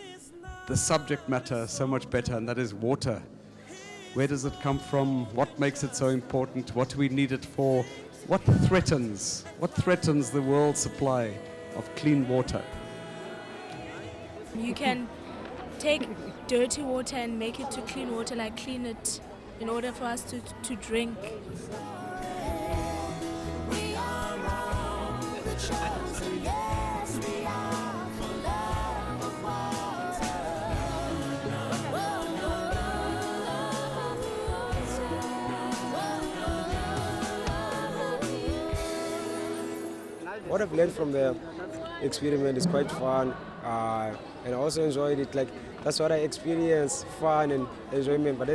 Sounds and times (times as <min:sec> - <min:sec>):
Music: 0:00.0 - 0:17.1, 0:17.9 - 0:42.6.